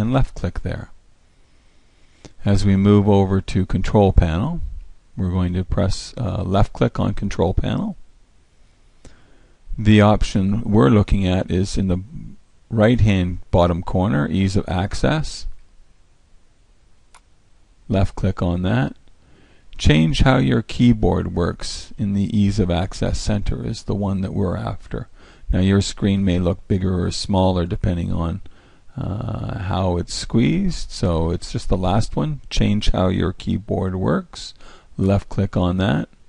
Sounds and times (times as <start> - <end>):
Speech: 0.0 - 1.0, 2.4 - 8.0, 9.7 - 15.6, 17.9 - 19.0, 19.8 - 36.2.